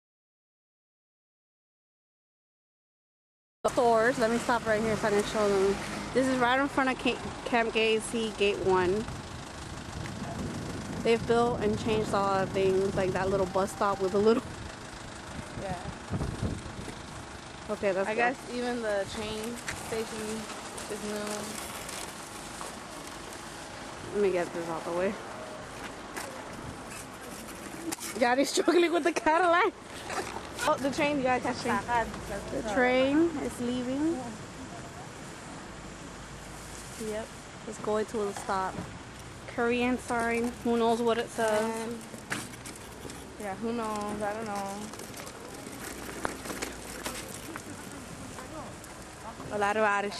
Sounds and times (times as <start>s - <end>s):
Outside, urban or manmade: 3.6s - 50.1s
Vehicle: 3.7s - 50.1s
Speech: 11.1s - 14.4s.